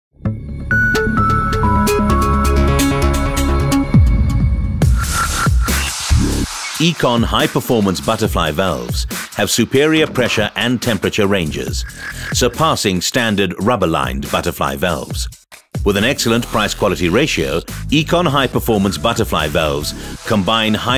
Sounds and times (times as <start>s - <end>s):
Dubstep: 4.8s - 14.5s, 16.2s - 20.9s
Speech: 6.8s - 20.9s.